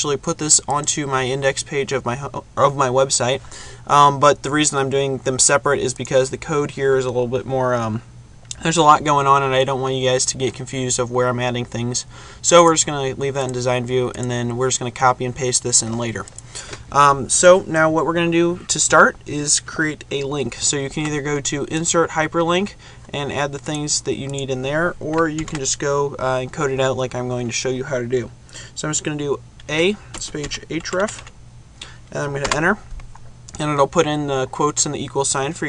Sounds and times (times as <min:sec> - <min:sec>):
Speech: 0:00.0 - 0:16.3, 0:16.9 - 0:31.2, 0:32.1 - 0:32.9, 0:33.5 - 0:35.6.